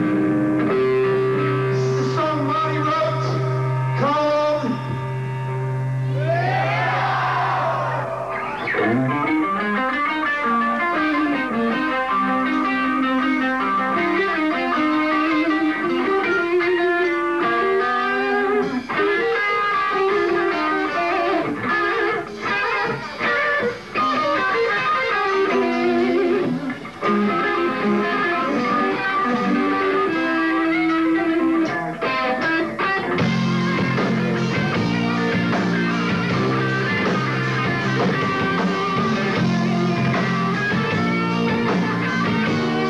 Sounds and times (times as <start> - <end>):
Music: 0.0 - 42.8.